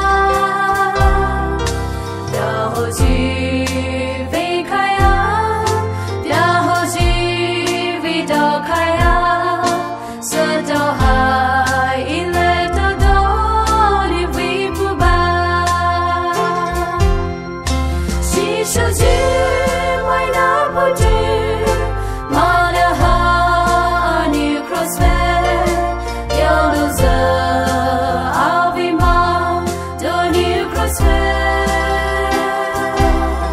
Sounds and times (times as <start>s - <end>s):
Christmas music: 0.0s - 33.5s
Gospel music: 0.0s - 33.5s.